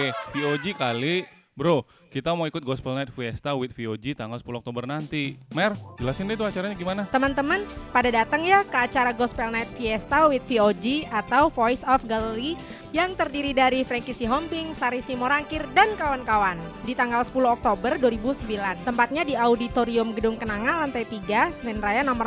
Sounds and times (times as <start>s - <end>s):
Speech: 0.0s - 22.2s
Music: 4.3s - 22.2s.